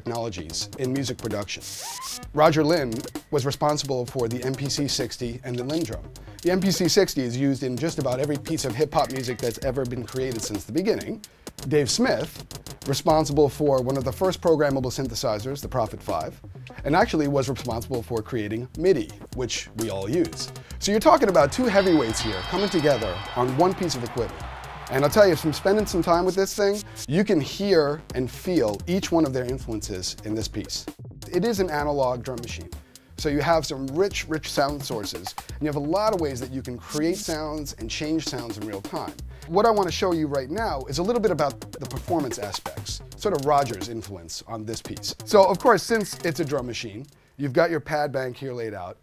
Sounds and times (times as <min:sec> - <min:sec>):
Speech: 0:00.0 - 0:24.3, 0:24.9 - 0:49.0
Drum machine: 0:00.0 - 0:47.2.